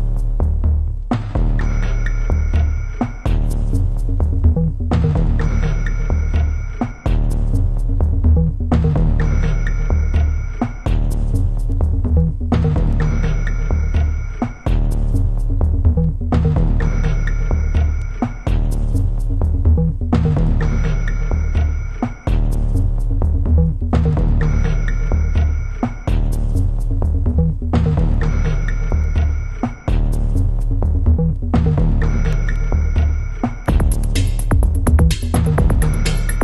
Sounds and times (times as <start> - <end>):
Music: 0.0 - 36.4.